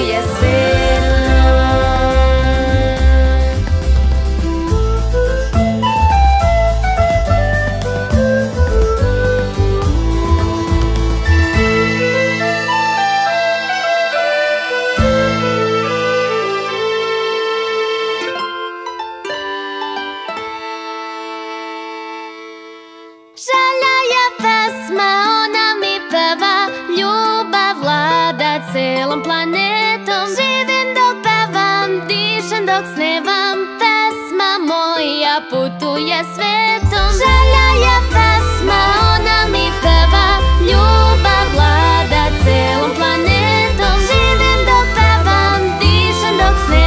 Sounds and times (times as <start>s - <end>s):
Music for children: 0.0s - 46.8s.